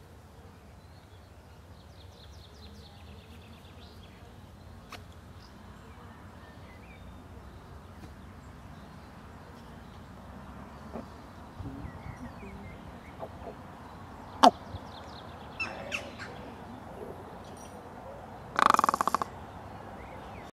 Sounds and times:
Crow: 0:18.6 - 0:19.3.

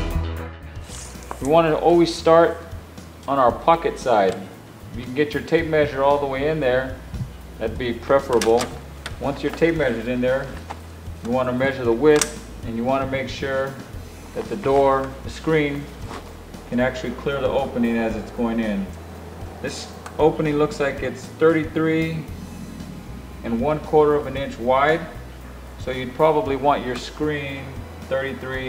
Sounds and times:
Music: 0:00.0 - 0:28.6
Speech: 0:01.4 - 0:02.6, 0:03.3 - 0:07.0, 0:07.6 - 0:10.6, 0:11.2 - 0:15.9, 0:16.7 - 0:19.0, 0:19.6 - 0:22.3, 0:23.4 - 0:25.2, 0:25.8 - 0:28.6.

